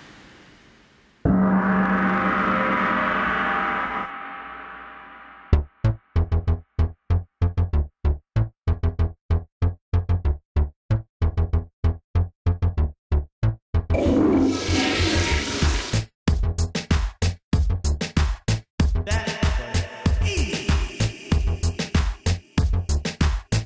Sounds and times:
Electronic music: 1.3s - 5.7s, 13.9s - 16.0s.

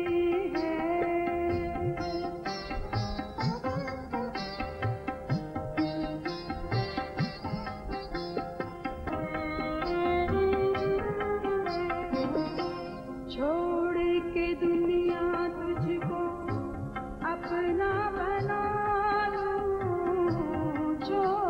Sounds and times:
Singing: 0.0s - 2.8s, 9.1s - 21.5s
Sitar: 0.0s - 21.5s.

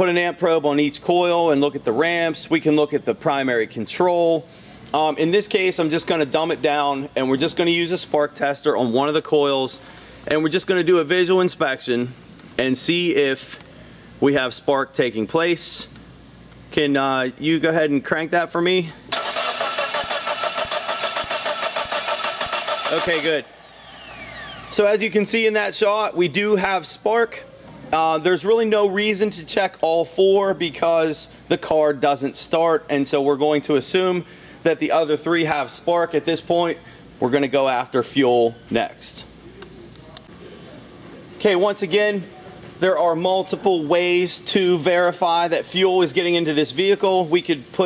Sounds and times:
Engine: 19.1s - 24.9s.

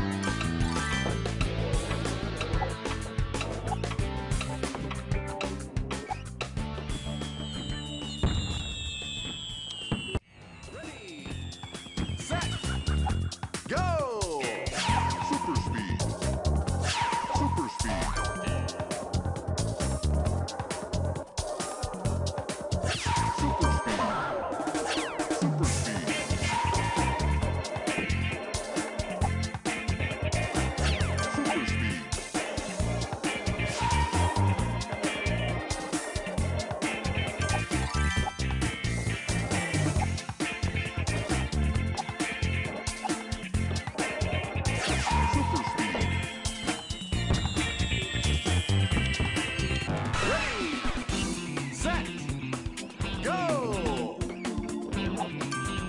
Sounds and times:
Music: 0.0s - 55.8s.

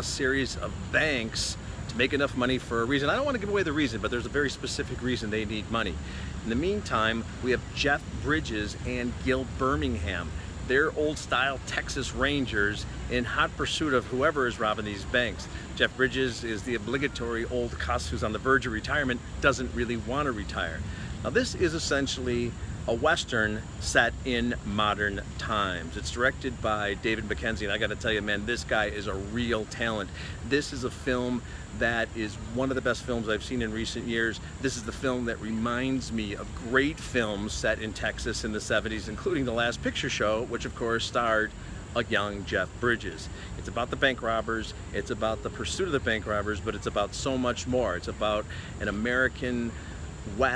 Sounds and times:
Speech: 0.0s - 50.5s.

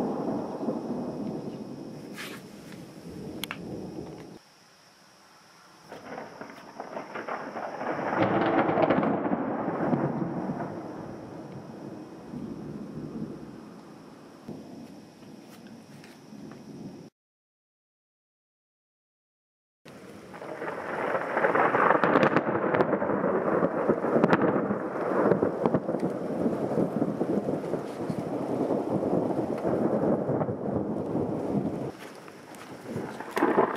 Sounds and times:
Thunder: 0.0s - 4.4s, 5.9s - 13.7s, 20.2s - 32.0s, 32.8s - 33.7s
Rustle: 0.0s - 17.0s, 19.9s - 33.7s.

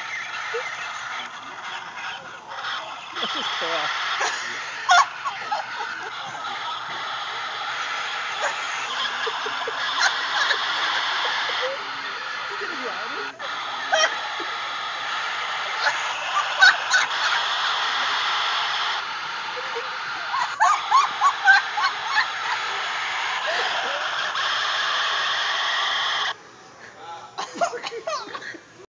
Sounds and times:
Giggle: 0.4s - 7.4s, 8.4s - 14.2s, 23.4s - 24.2s, 27.4s - 28.7s.

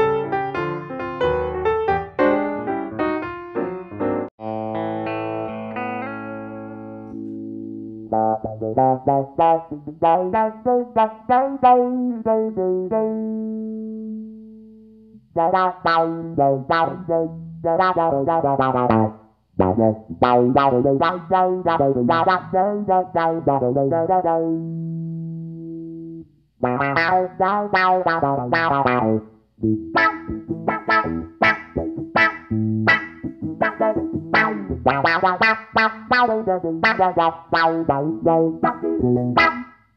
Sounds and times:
Distortion: 0.0s - 39.9s
Music: 0.0s - 39.9s.

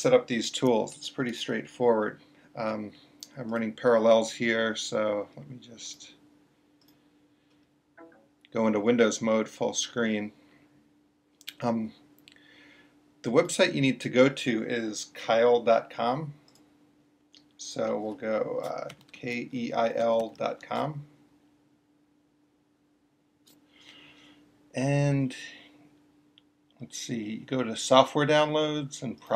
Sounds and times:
Speech: 0.0s - 6.2s, 8.5s - 10.4s, 11.5s - 12.0s, 13.3s - 16.4s, 17.6s - 21.2s, 24.8s - 25.8s, 26.8s - 29.3s.

